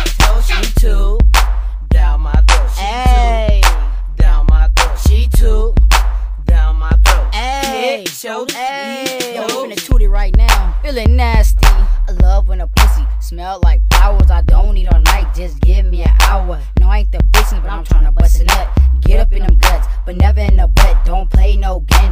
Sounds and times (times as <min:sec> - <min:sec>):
Music: 0:00.0 - 0:22.1.